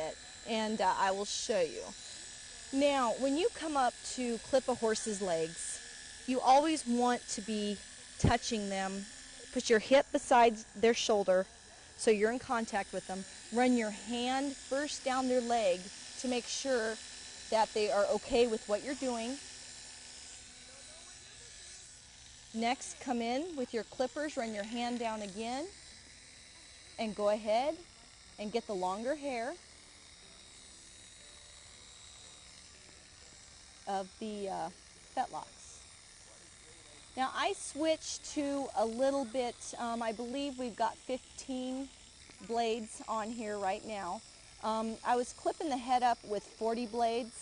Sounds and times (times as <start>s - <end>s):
Speech: 0.0s - 2.0s, 2.7s - 19.4s, 22.6s - 25.7s, 27.0s - 27.8s, 28.4s - 29.6s, 33.9s - 35.8s, 36.4s - 41.9s, 42.5s - 47.4s.